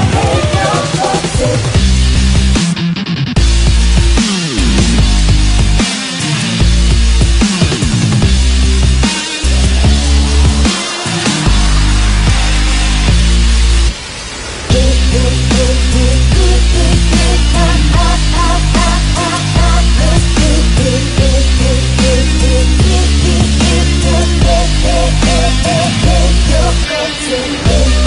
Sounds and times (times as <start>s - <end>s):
Grunge: 0.0s - 28.0s.